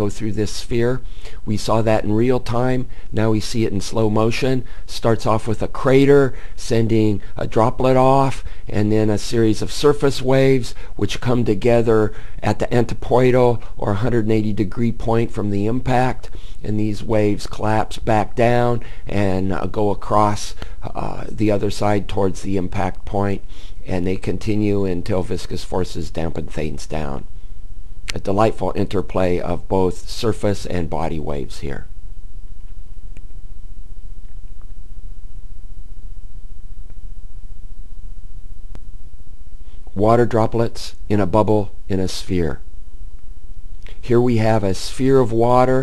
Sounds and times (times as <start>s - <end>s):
Speech: 0.0s - 27.3s, 28.1s - 31.9s, 40.0s - 42.7s, 44.0s - 45.8s.